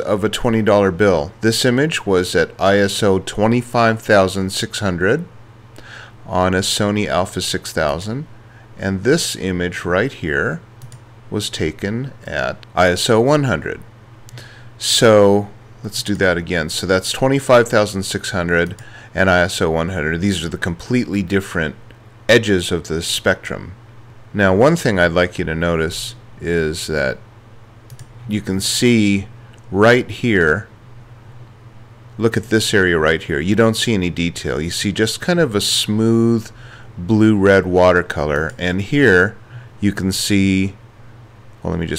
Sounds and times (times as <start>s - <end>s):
Speech: 0.0s - 5.3s, 6.2s - 10.7s, 11.3s - 13.9s, 14.8s - 27.2s, 28.3s - 30.7s, 32.2s - 40.8s, 41.6s - 41.9s.